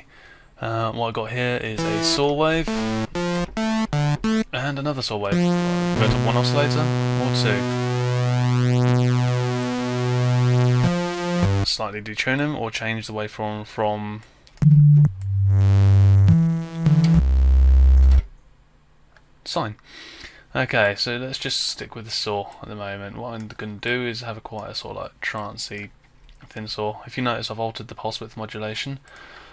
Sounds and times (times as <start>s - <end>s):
Speech: 0.6s - 2.9s, 4.5s - 7.8s, 11.6s - 14.2s, 19.4s - 19.8s, 20.5s - 29.0s.